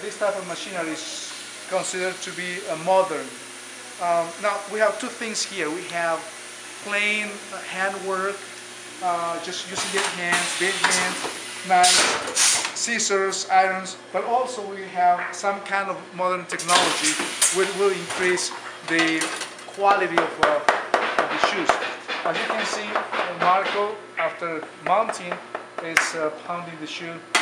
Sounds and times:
Speech: 0:00.0 - 0:03.4, 0:04.0 - 0:08.4, 0:09.0 - 0:20.7, 0:21.3 - 0:27.3.

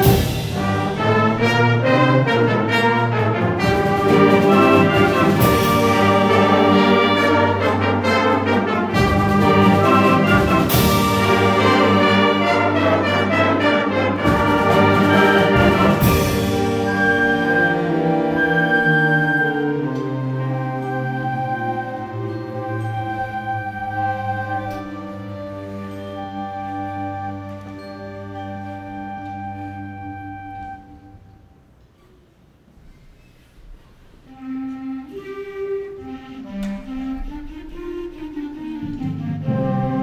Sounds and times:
Music: 0:00.0 - 0:40.0.

